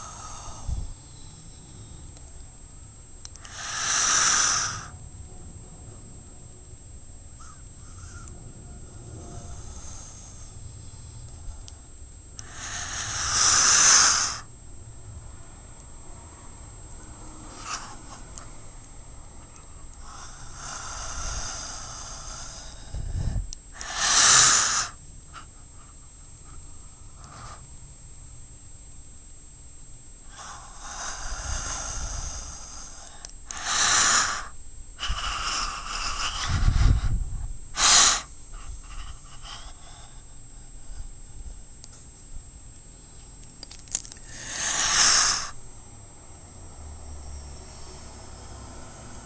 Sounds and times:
Inside, small room: 0.0 - 49.2.

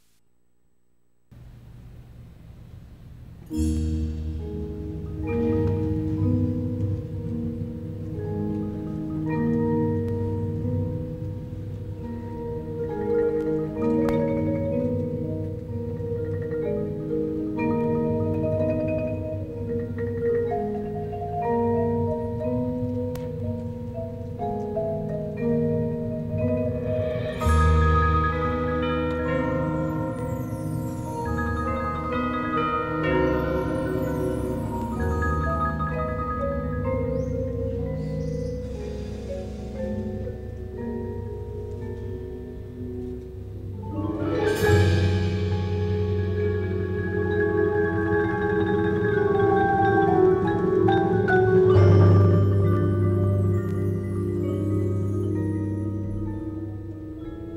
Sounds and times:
Vibraphone: 3.5 - 57.5.

